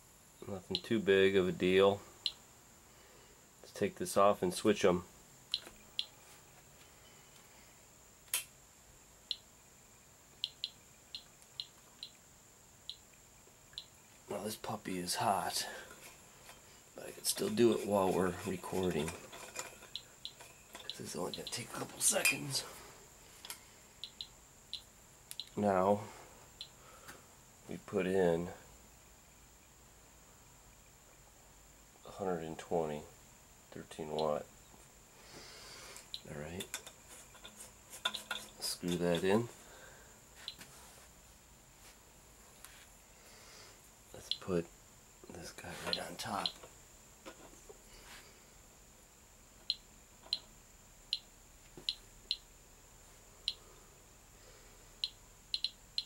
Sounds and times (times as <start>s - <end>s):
Speech: 0.4s - 2.0s, 3.7s - 5.1s, 14.3s - 15.8s, 17.0s - 19.2s, 21.0s - 22.7s, 25.6s - 26.1s, 27.7s - 28.6s, 32.1s - 33.1s, 33.7s - 34.5s, 36.2s - 36.7s, 38.6s - 39.5s, 44.2s - 44.7s, 45.3s - 46.5s.